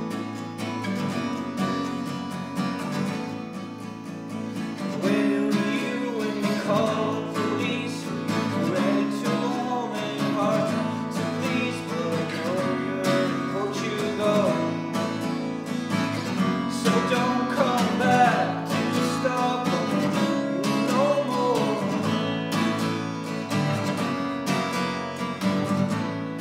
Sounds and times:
Music: 0.0s - 26.4s.

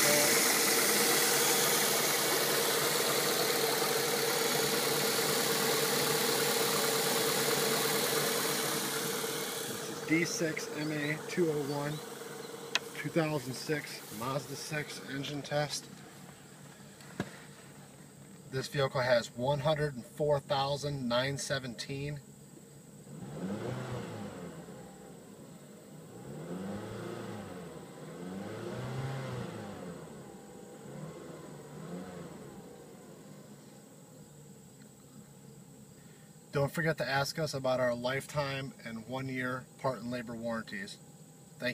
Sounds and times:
Speech: 0.0s - 0.4s, 9.7s - 12.0s, 12.9s - 15.9s, 18.5s - 22.2s, 36.6s - 41.0s
Idling: 0.0s - 18.4s, 29.8s - 36.5s
Medium engine (mid frequency): 0.0s - 41.7s
Vehicle: 0.0s - 41.7s.

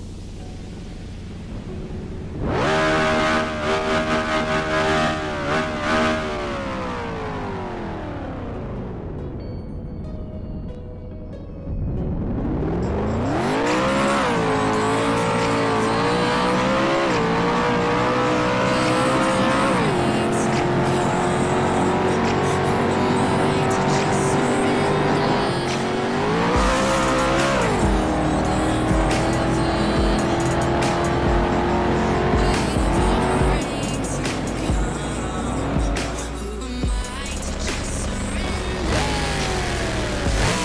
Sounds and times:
Music: 0.0s - 40.6s.

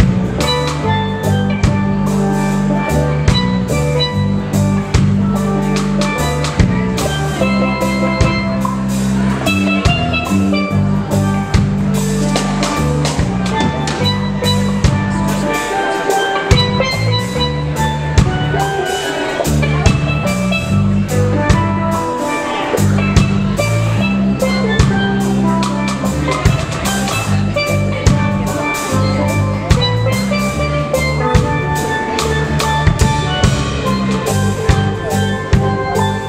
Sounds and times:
Drum: 0.0s - 36.2s.

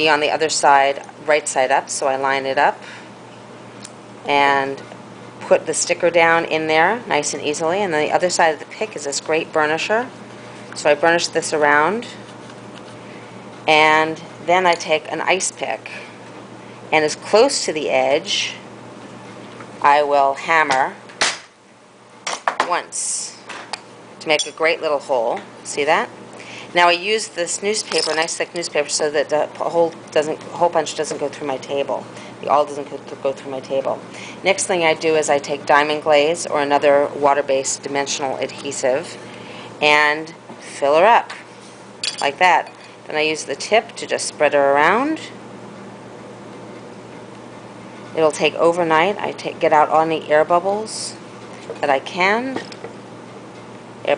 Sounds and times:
Speech: 0.0s - 2.8s, 4.3s - 10.1s, 10.8s - 12.2s, 13.7s - 16.1s, 17.0s - 18.6s, 19.8s - 21.0s, 22.6s - 23.5s, 24.2s - 26.1s, 26.8s - 39.2s, 39.8s - 41.4s, 42.2s - 45.4s, 48.2s - 51.2s, 51.8s - 52.7s.

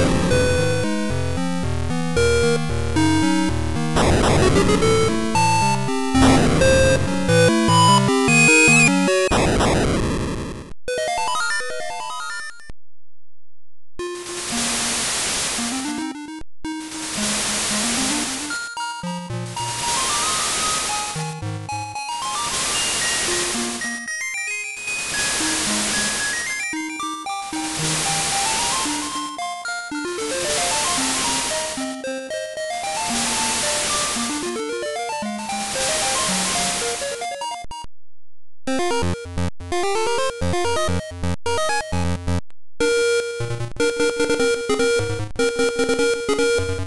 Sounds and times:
Music: 0.0s - 9.4s, 18.4s - 37.7s, 38.8s - 42.3s, 42.9s - 46.8s.

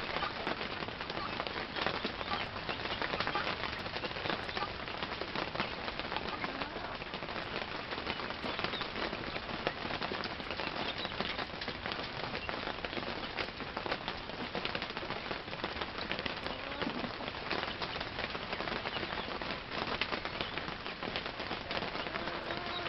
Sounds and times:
Animal: 4.4s - 4.8s, 6.2s - 7.1s, 16.3s - 17.3s, 21.7s - 22.8s.

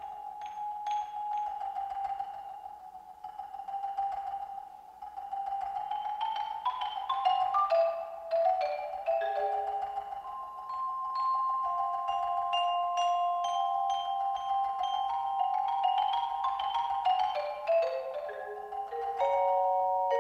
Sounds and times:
Tubular bells: 0.0s - 20.2s.

